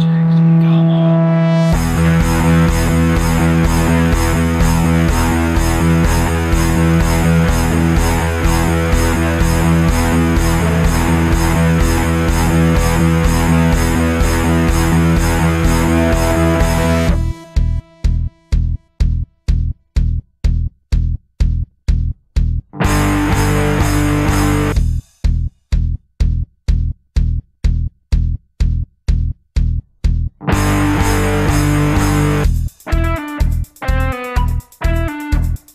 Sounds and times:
Music: 0.0 - 35.7.

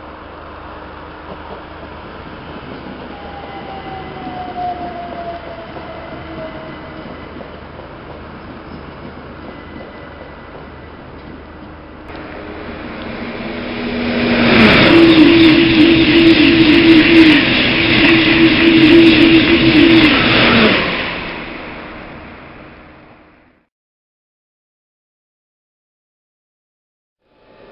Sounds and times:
Train: 0.0 - 23.7, 27.2 - 27.7.

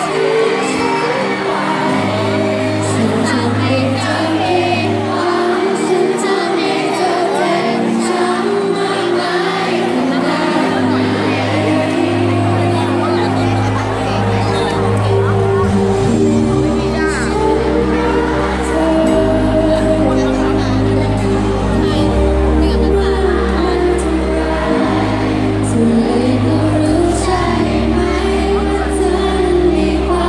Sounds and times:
Music: 0.0 - 30.2
Speech: 2.8 - 30.2.

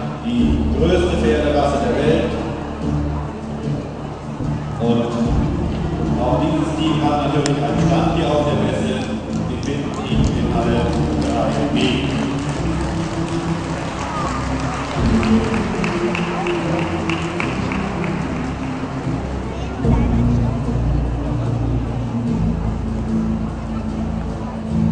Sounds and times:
Speech: 0.0 - 2.6, 4.8 - 12.3, 19.4 - 21.6.

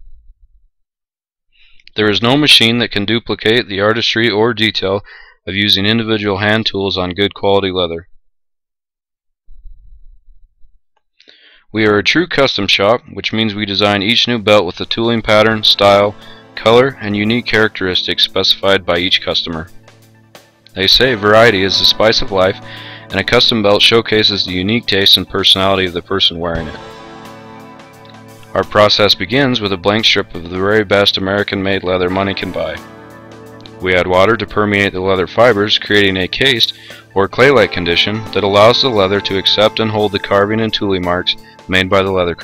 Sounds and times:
Speech: 1.9 - 8.1, 11.7 - 19.7, 20.8 - 26.9, 28.6 - 32.8, 33.8 - 42.4.

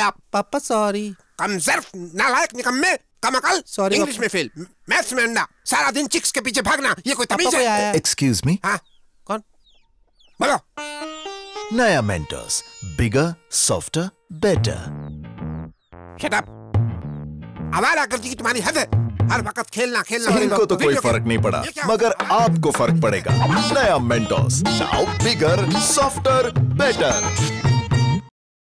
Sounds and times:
Speech: 0.0 - 9.4, 11.7 - 15.0, 16.2 - 16.5, 17.8 - 27.3
Music: 10.8 - 19.5, 20.6 - 28.3.

